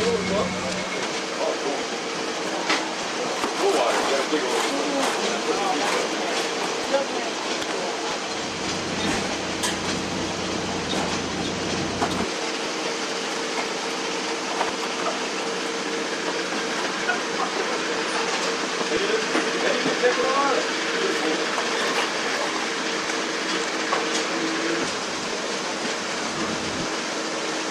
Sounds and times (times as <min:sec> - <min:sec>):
Speech: 0:03.6 - 0:08.0, 0:18.9 - 0:21.6.